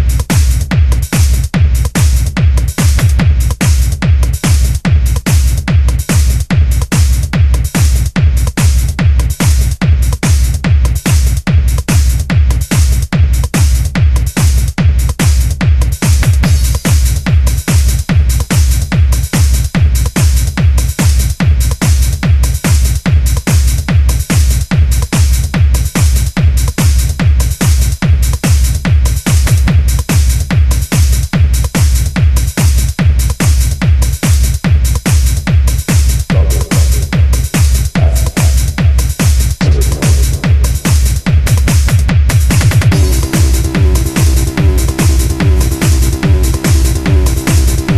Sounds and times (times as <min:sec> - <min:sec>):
Music: 0:00.0 - 0:47.9.